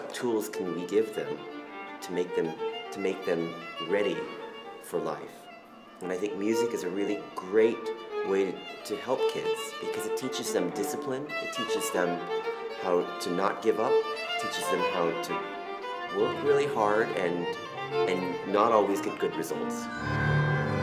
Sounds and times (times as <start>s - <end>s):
Speech: 0.0s - 1.4s, 2.0s - 5.4s, 6.0s - 12.2s, 12.8s - 15.4s, 16.1s - 19.9s
Music: 0.0s - 20.8s.